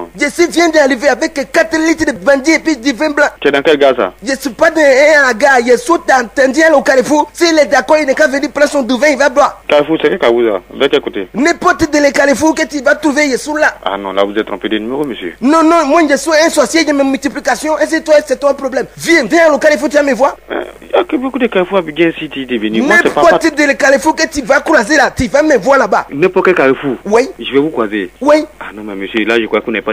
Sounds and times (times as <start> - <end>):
Speech: 0.0 - 29.9.